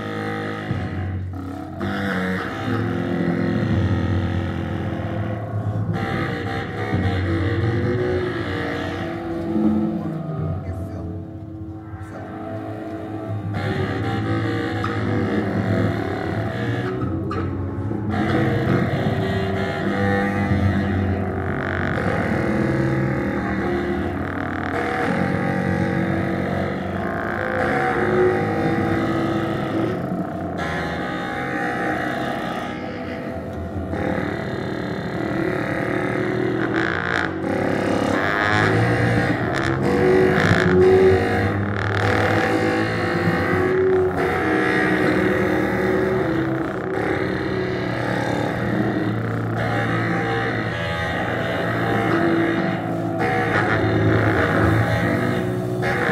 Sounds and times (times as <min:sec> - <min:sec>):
Trombone: 0:12.2 - 0:56.1.